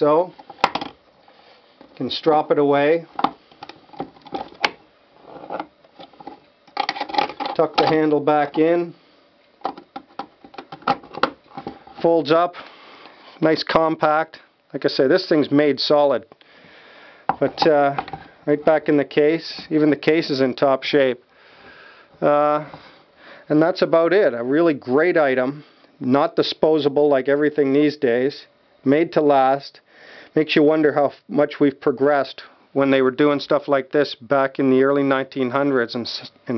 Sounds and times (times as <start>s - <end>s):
Speech: 0.0s - 0.4s, 2.0s - 3.1s, 7.6s - 9.0s, 12.0s - 12.6s, 13.4s - 16.3s, 17.4s - 21.2s, 22.2s - 22.8s, 23.5s - 29.8s, 30.4s - 36.5s.